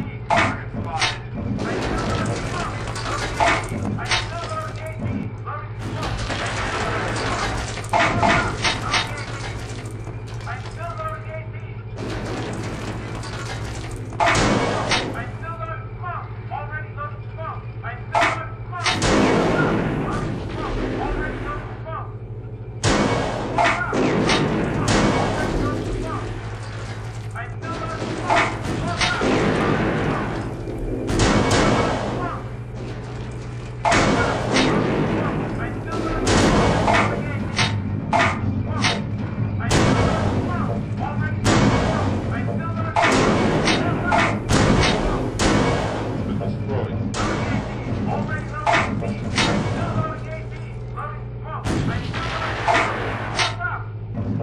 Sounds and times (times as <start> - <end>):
Speech: 0.0 - 2.8, 3.4 - 6.2, 10.4 - 11.9, 15.0 - 22.1, 23.6 - 26.3, 27.4 - 29.3, 31.7 - 32.5, 35.2 - 36.3, 38.2 - 39.0, 39.6 - 45.3, 47.8 - 53.9.